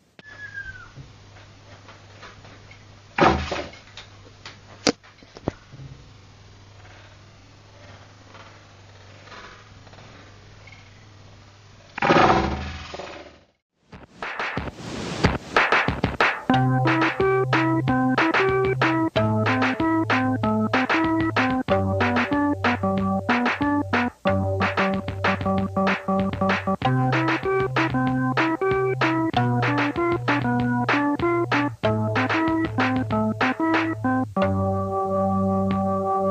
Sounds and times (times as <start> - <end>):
Electric piano: 16.5 - 36.3.